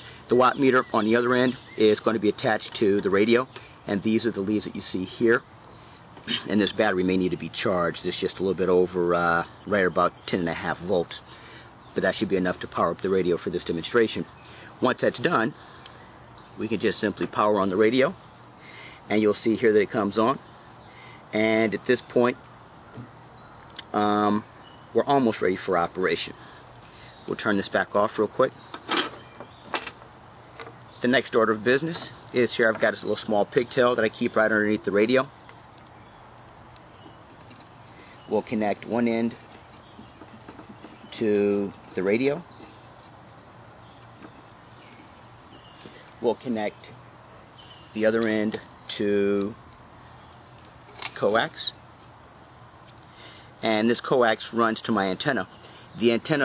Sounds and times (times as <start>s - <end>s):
Insect: 0.0s - 56.4s
Speech: 0.3s - 5.4s, 6.3s - 11.2s, 12.0s - 15.6s, 16.6s - 18.2s, 19.1s - 20.4s, 21.3s - 22.4s, 23.8s - 24.4s, 25.0s - 26.4s, 27.3s - 28.6s, 31.0s - 35.3s, 38.3s - 39.4s, 41.1s - 42.5s, 46.2s - 46.9s, 48.0s - 49.6s, 51.2s - 51.8s, 53.6s - 56.4s.